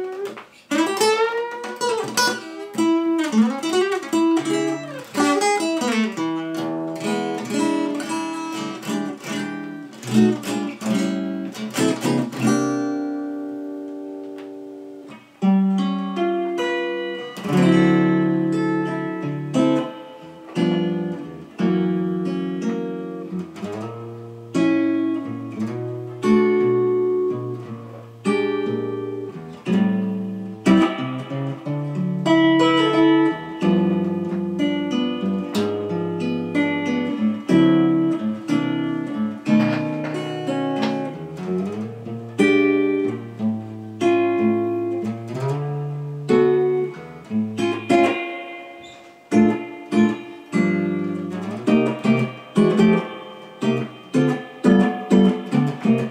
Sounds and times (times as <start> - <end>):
Acoustic guitar: 0.0 - 56.1
Strum: 0.0 - 56.1.